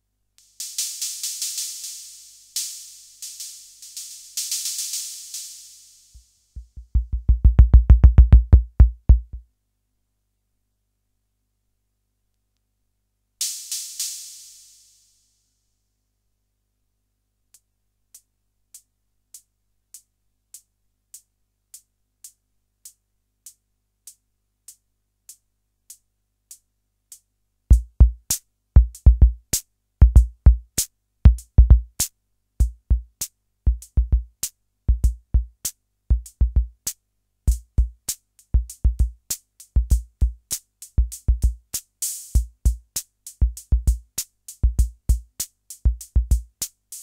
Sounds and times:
Drum machine: 0.4s - 9.4s, 27.7s - 47.0s.

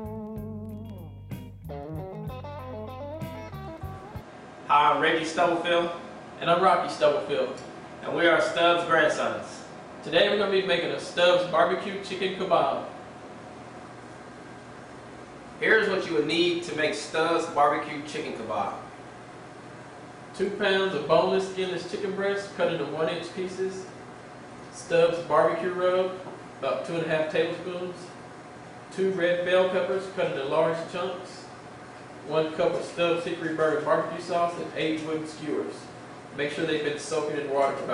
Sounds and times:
Speech: 4.7s - 12.9s, 15.6s - 18.9s, 20.3s - 24.0s, 24.7s - 28.2s, 28.9s - 31.6s, 32.2s - 37.9s.

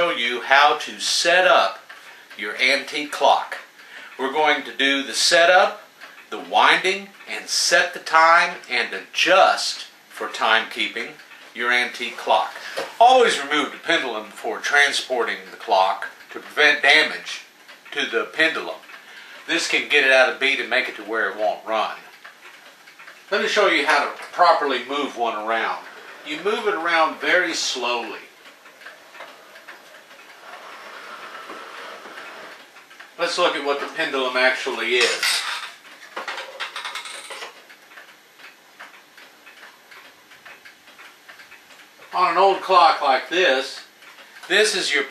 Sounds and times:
Speech: 0.0s - 1.8s, 2.4s - 18.8s, 19.5s - 22.1s, 23.3s - 28.3s, 33.2s - 35.4s, 42.1s - 43.9s, 44.5s - 45.1s.

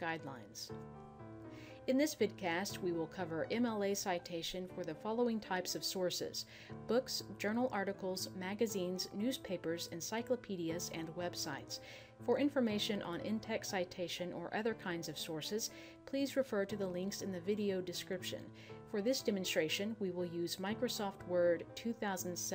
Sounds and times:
Speech: 0.0s - 0.7s, 1.9s - 22.5s
Music: 0.0s - 22.5s.

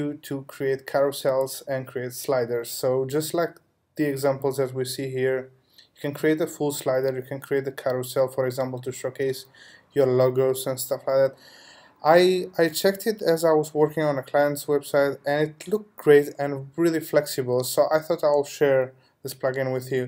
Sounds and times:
Speech: 0.0s - 11.4s, 12.0s - 20.0s.

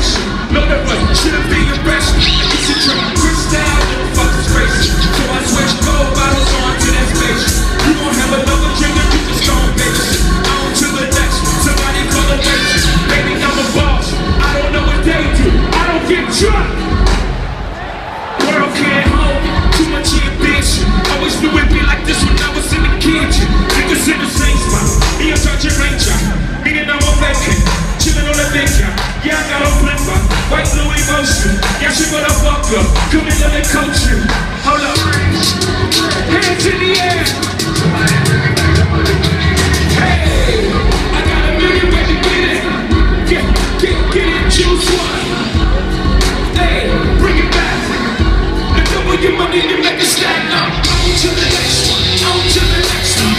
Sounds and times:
Music: 0.0s - 53.3s
Singing: 0.0s - 53.3s.

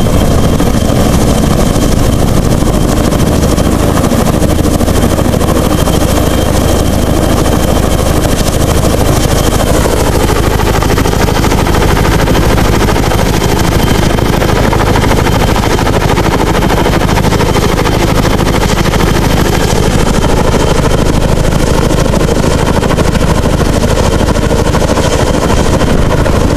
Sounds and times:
Helicopter: 0.0s - 26.5s.

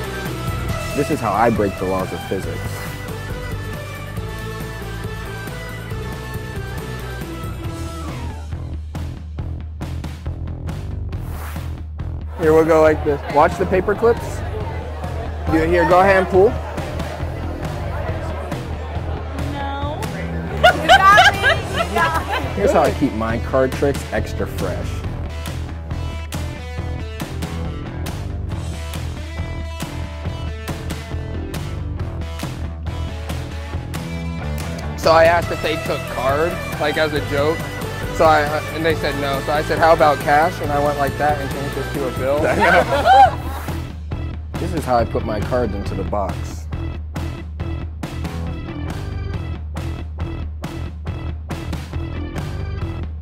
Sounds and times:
Music: 0.0s - 53.2s.

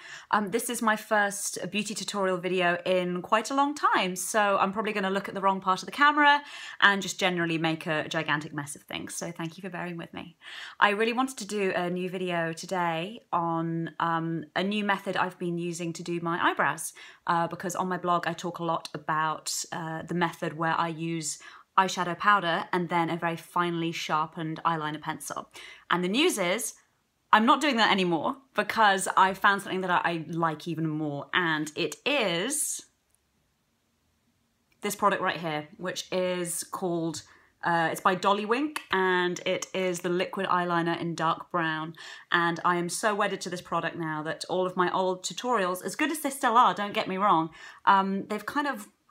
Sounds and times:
Speech: 0.3s - 26.8s, 27.4s - 32.9s, 34.8s - 49.0s.

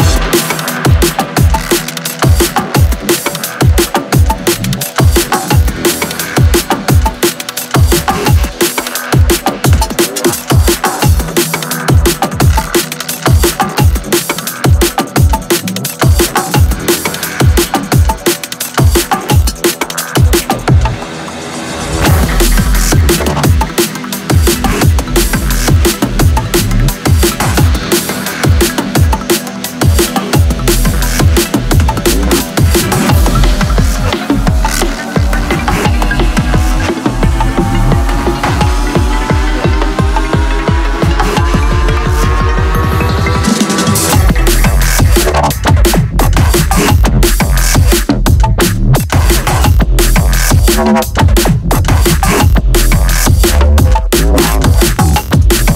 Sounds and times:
Dubstep: 0.0s - 55.7s.

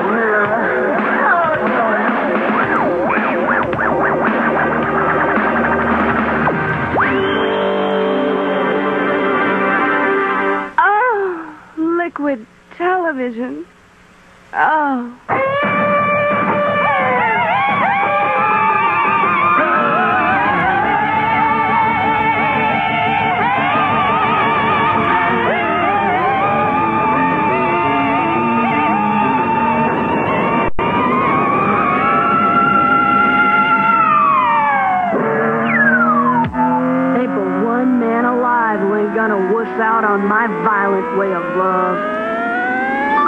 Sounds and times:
Speech: 0.0s - 3.1s, 10.8s - 13.7s, 14.6s - 15.2s, 37.2s - 42.0s
Music: 0.0s - 10.9s, 15.3s - 43.2s.

